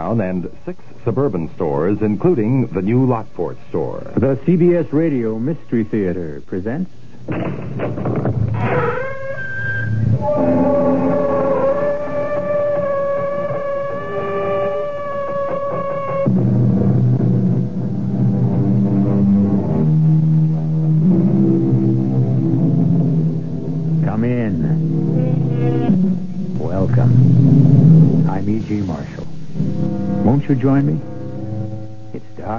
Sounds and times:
Speech: 0.0 - 6.9, 24.0 - 24.8, 26.6 - 27.2, 28.3 - 29.3, 30.2 - 31.0, 32.2 - 32.5.

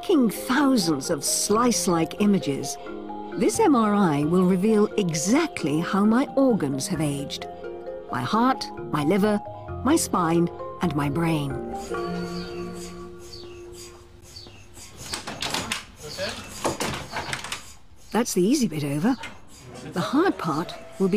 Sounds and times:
Music: 0.0 - 14.9, 20.0 - 21.1.

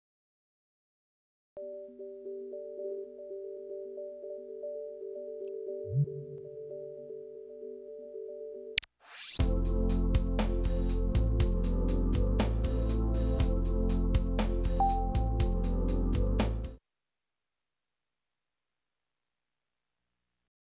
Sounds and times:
Music: 1.6 - 8.8, 9.4 - 16.8.

